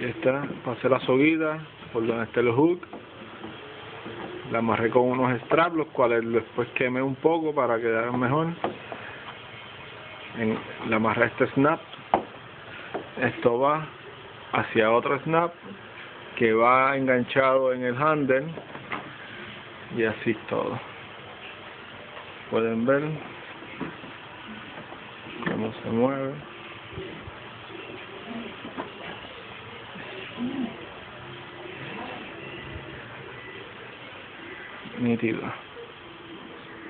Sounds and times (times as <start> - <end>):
Speech: 0.0 - 2.9, 4.5 - 8.6, 10.3 - 11.8, 13.2 - 15.6, 16.4 - 18.6, 19.9 - 20.9, 22.5 - 23.3, 25.4 - 26.5, 34.9 - 35.7.